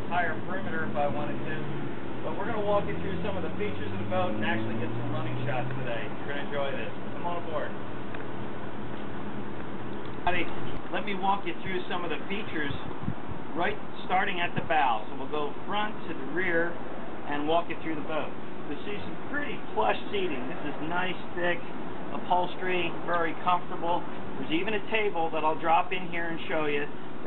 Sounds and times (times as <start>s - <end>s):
Speech: 0.0s - 1.6s, 2.2s - 7.8s, 10.2s - 12.9s, 13.5s - 27.2s.